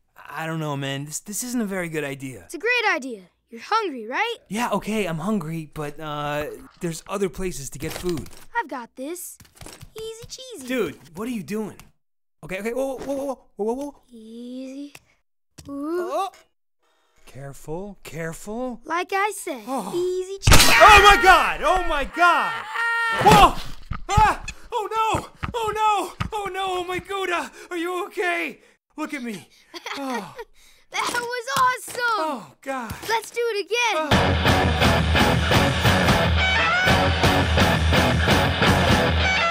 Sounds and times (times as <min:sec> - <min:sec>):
Music: 0:34.1 - 0:39.5.